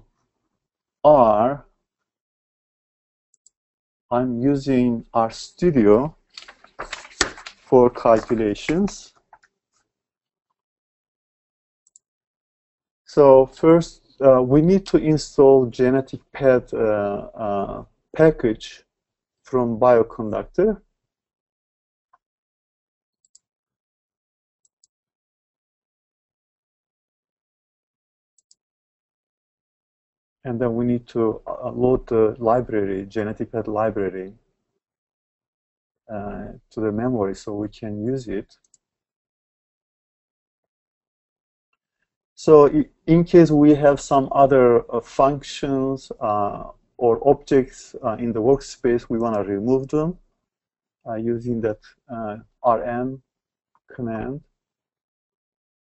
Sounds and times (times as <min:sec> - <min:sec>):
Speech: 0:01.1 - 0:01.6, 0:04.1 - 0:06.2, 0:07.7 - 0:09.1, 0:13.1 - 0:18.8, 0:19.5 - 0:20.8, 0:30.5 - 0:34.4, 0:36.1 - 0:38.5, 0:42.4 - 0:50.2, 0:51.1 - 0:53.2, 0:53.9 - 0:54.4.